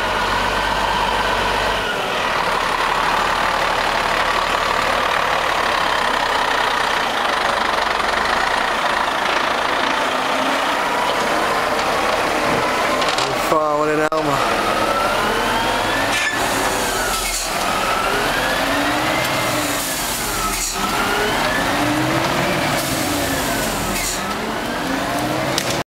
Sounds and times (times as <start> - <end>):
Truck: 0.0 - 25.9.